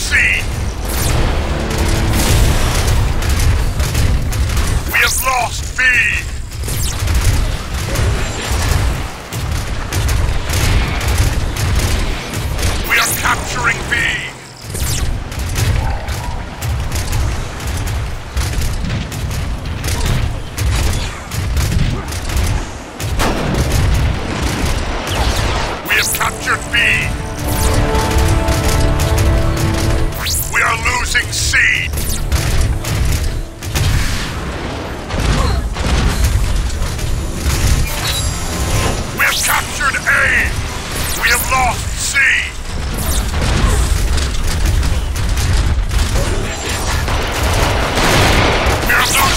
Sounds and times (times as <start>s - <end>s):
Speech: 0.0s - 0.5s, 4.9s - 6.4s, 12.9s - 14.4s, 25.9s - 27.2s, 30.2s - 31.9s, 39.2s - 40.5s, 41.2s - 42.6s, 48.9s - 49.3s.